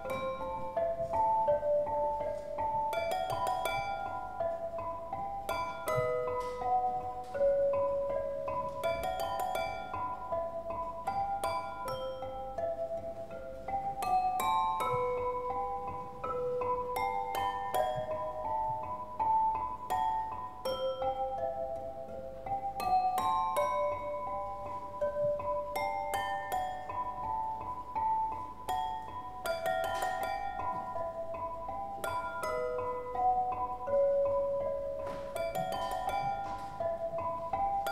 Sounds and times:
Music: 0.0 - 37.9.

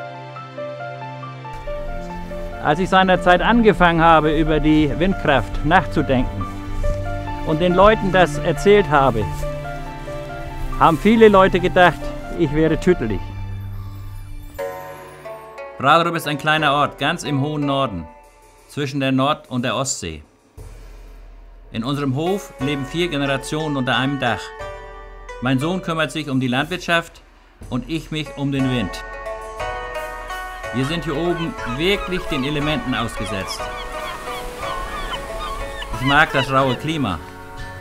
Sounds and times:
Music: 0.0 - 37.8
Rustling leaves: 1.6 - 12.3, 30.7 - 37.8
Speech: 2.6 - 6.4, 7.5 - 9.3, 10.8 - 13.2, 15.8 - 18.1, 18.7 - 20.3, 21.8 - 24.5, 25.4 - 29.0, 30.8 - 33.6, 36.0 - 37.2.

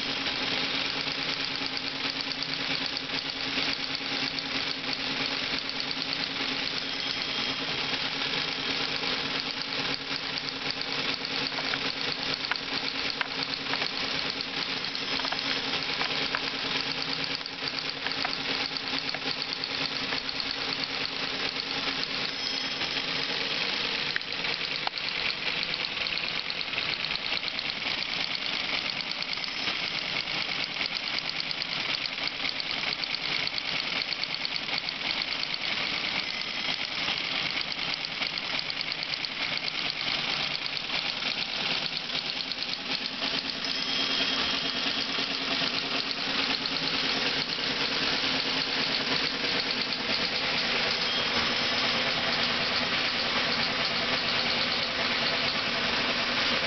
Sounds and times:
Typewriter: 0.0 - 56.6.

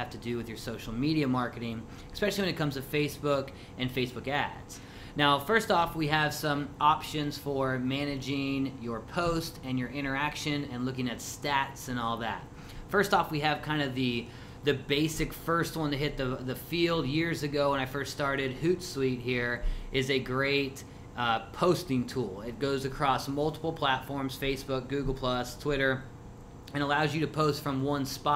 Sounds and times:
Speech: 0.0 - 26.1, 26.7 - 28.3.

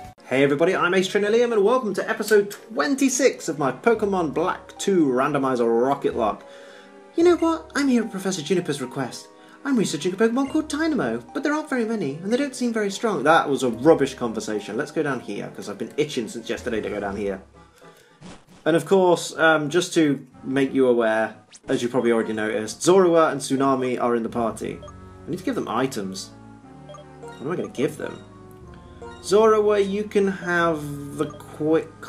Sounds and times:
Music: 0.0 - 32.0
Speech: 0.2 - 6.4, 7.2 - 17.4, 18.7 - 26.3, 27.4 - 28.2, 29.2 - 32.0.

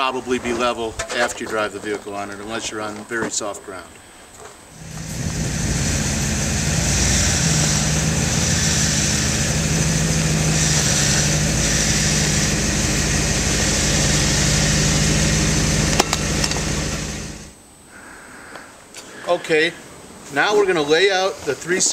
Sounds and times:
Speech: 0.0 - 4.0, 19.3 - 21.9
Idling: 4.8 - 17.6
Medium engine (mid frequency): 4.8 - 17.6.

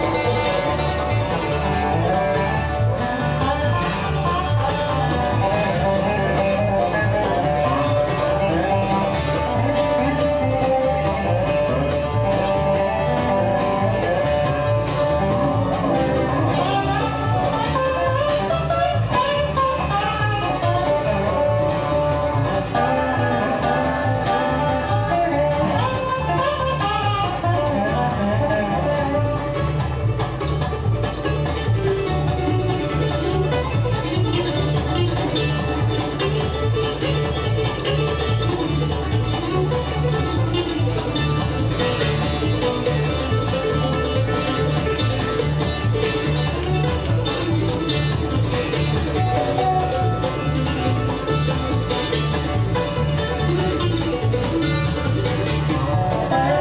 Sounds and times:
Banjo: 0.0 - 56.6
Bass guitar: 0.0 - 56.6
Country: 0.0 - 56.6
Violin, fiddle: 0.0 - 56.6.

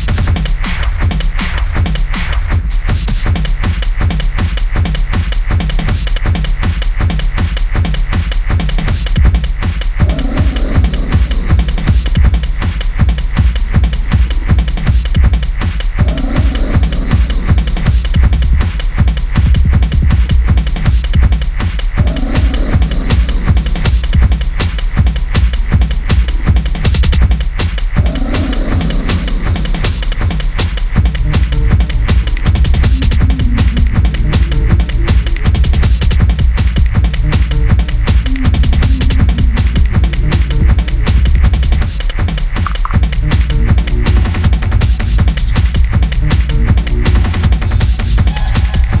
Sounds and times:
Techno: 0.0 - 49.0.

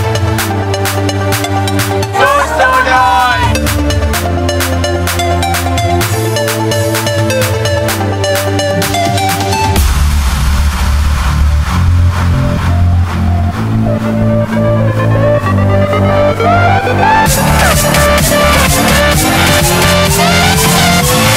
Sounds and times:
Music: 0.0 - 21.3
Speech: 2.2 - 3.6.

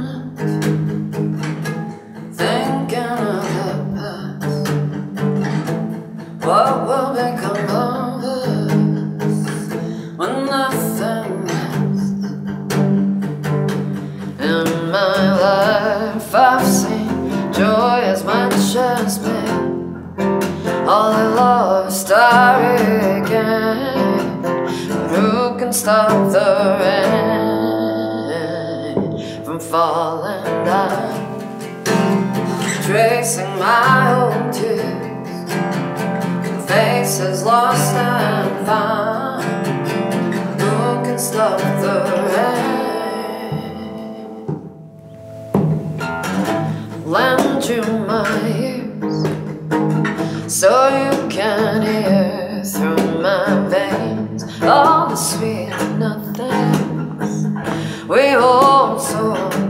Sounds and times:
Music: 0.0 - 59.6.

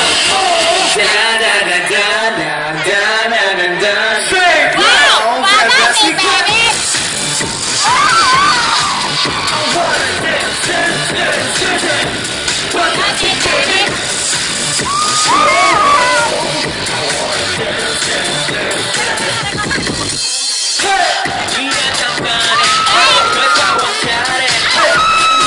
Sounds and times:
Music: 0.0 - 25.4.

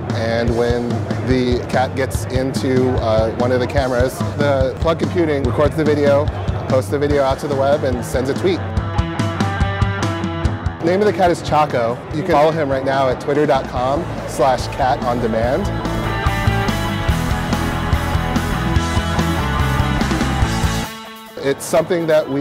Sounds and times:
Music: 0.0 - 22.4
Speech: 0.1 - 8.6, 10.8 - 15.7, 21.4 - 22.4.

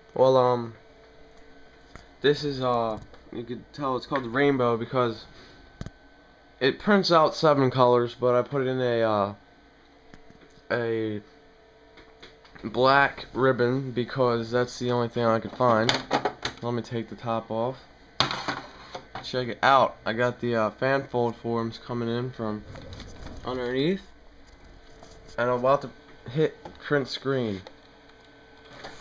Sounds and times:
Speech: 0.2 - 0.8, 2.2 - 5.3, 6.6 - 9.4, 10.7 - 11.3, 12.6 - 16.0, 16.6 - 17.9, 19.2 - 22.7, 23.4 - 24.1, 25.4 - 27.7.

